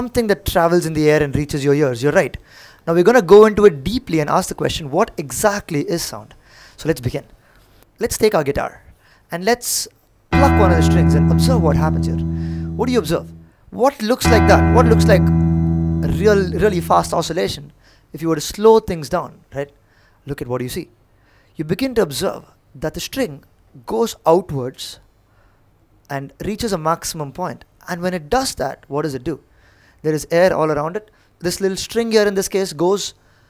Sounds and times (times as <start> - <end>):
Speech: 0.0 - 7.3, 8.0 - 8.8, 9.4 - 15.2, 16.0 - 17.6, 20.3 - 20.9, 21.6 - 25.0, 26.1 - 29.4, 30.0 - 33.2.